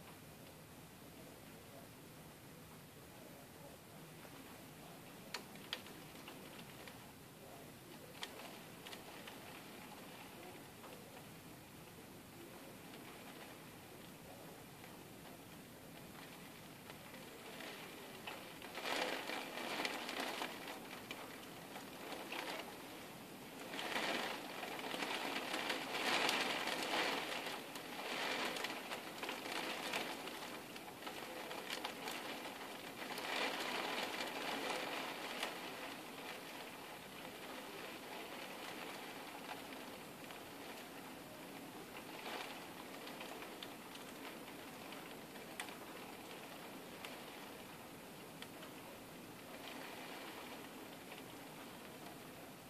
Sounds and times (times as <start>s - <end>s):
Raindrop: 4.0s - 52.7s.